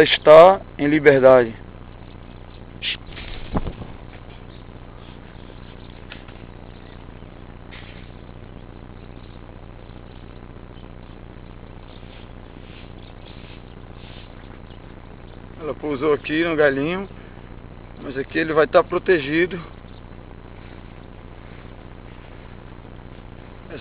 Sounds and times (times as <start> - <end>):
Speech: 0.0 - 1.6, 15.6 - 17.1, 18.0 - 19.7
Bird: 1.8 - 18.2, 19.6 - 23.8.